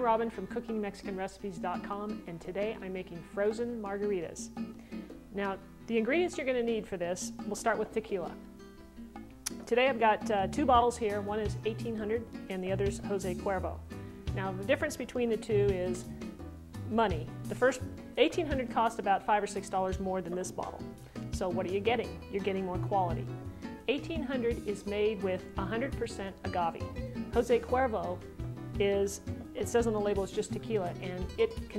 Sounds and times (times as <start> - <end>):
Speech: 0.0 - 4.5, 5.4 - 8.4, 9.6 - 13.8, 14.4 - 16.0, 16.9 - 20.8, 21.4 - 23.3, 23.9 - 28.2, 28.8 - 31.7
Music: 0.0 - 31.7.